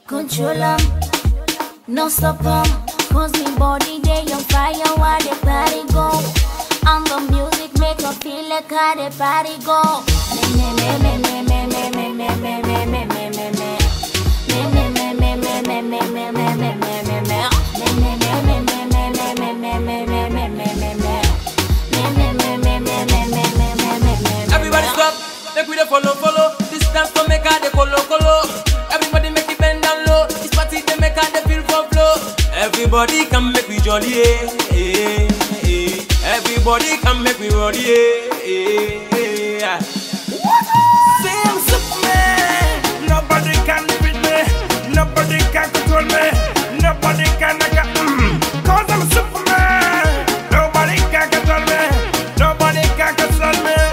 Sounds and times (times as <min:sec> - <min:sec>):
Afrobeat: 0:00.0 - 0:53.9.